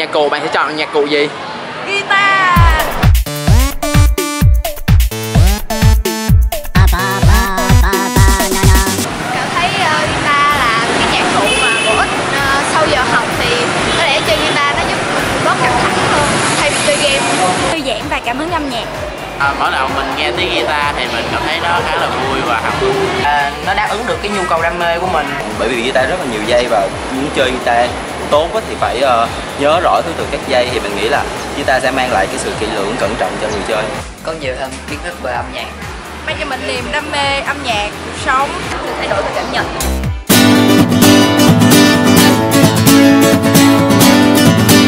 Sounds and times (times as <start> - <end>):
Music: 2.5 - 9.1, 17.7 - 44.8.